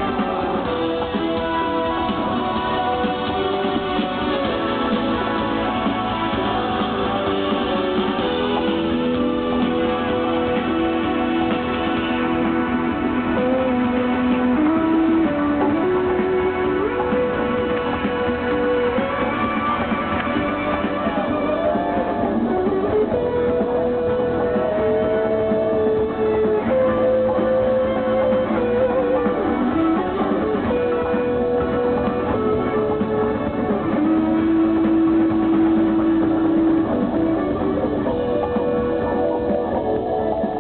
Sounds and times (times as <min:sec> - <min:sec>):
Music: 0:00.0 - 0:40.6.